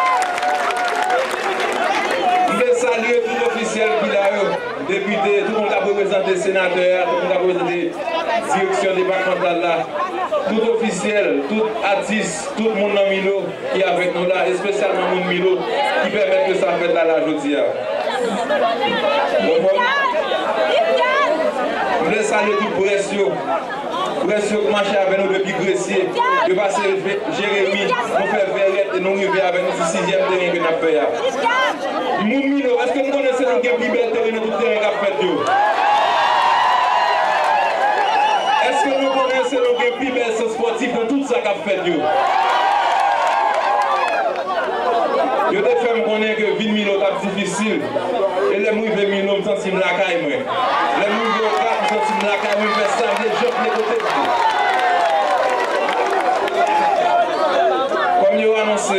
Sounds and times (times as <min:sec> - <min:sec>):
Speech: 0:02.2 - 0:35.5, 0:38.6 - 0:42.1, 0:45.0 - 0:54.3, 0:57.1 - 0:58.9.